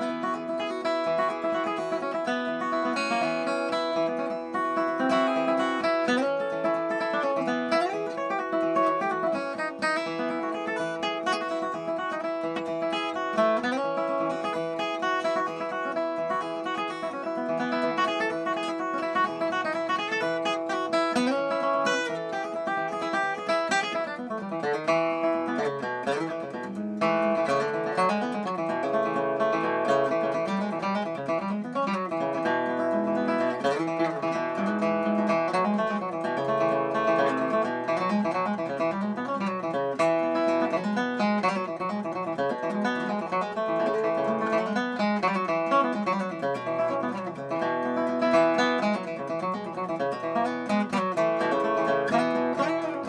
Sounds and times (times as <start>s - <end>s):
Steel guitar, slide guitar: 0.0s - 53.0s.